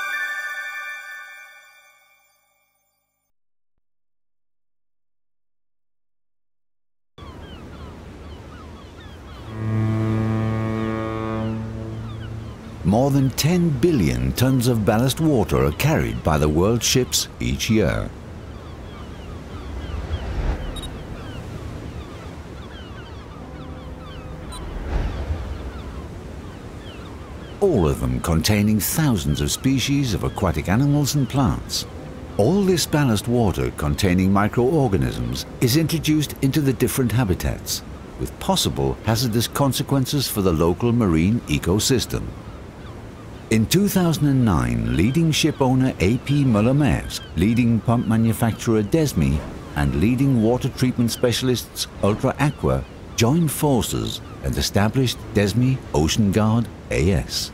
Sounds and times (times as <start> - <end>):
Ship: 7.2 - 57.5.